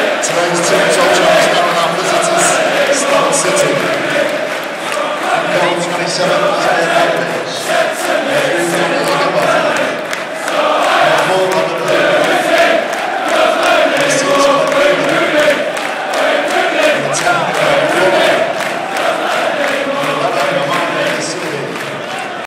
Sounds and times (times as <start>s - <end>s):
Speech: 0.0s - 4.1s, 5.3s - 9.9s, 11.0s - 12.4s, 13.9s - 15.5s, 16.8s - 18.5s, 19.9s - 21.9s.